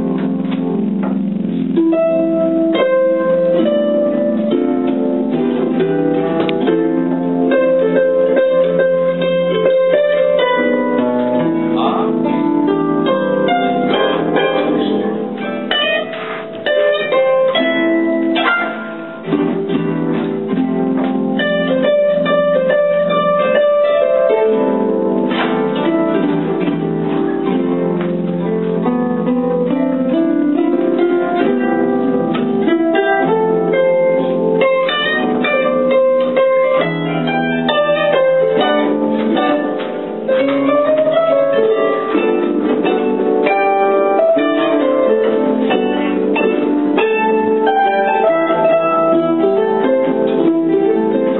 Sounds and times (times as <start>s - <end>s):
Harp: 0.0s - 51.3s
Pizzicato: 0.0s - 51.3s.